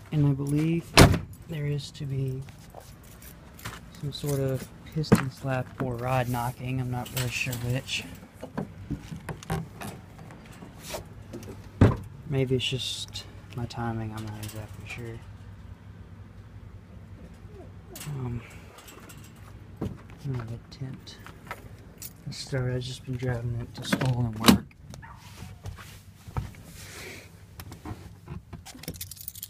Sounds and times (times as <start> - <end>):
Speech: 0.0 - 2.5, 4.0 - 8.2, 12.3 - 15.3, 18.0 - 18.5, 20.2 - 21.2, 22.3 - 24.7.